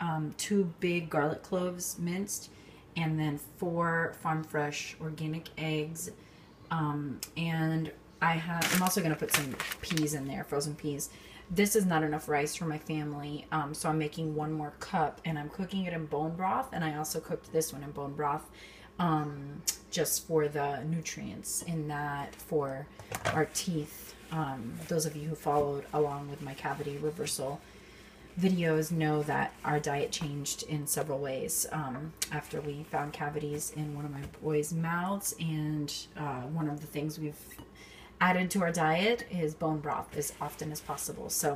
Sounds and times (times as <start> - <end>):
Speech: 0.0 - 27.6, 28.4 - 37.6, 38.2 - 41.5.